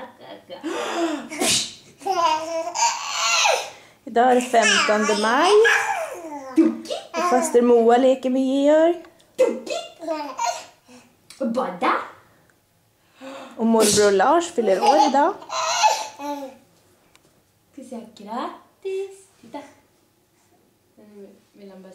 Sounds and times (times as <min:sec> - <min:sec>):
Speech: 0:17.8 - 0:19.8, 0:21.0 - 0:21.9.